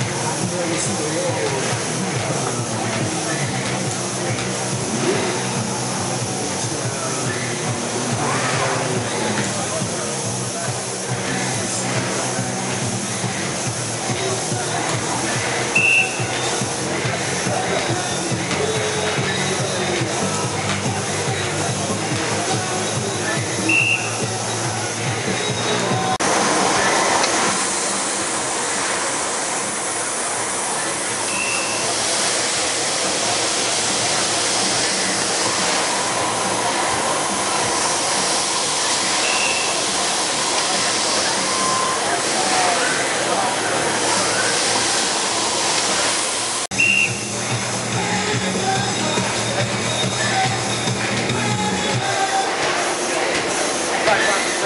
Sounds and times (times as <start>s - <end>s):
Speech: 0.0s - 26.2s, 30.1s - 45.3s, 47.9s - 54.6s.